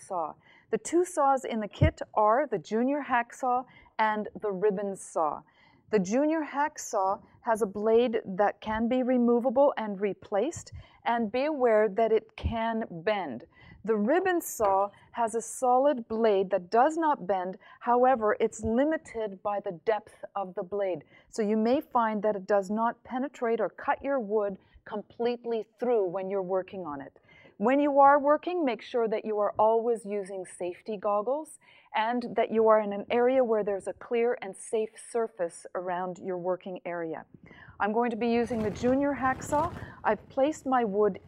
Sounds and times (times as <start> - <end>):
Speech: 0.0 - 5.4, 6.0 - 41.2.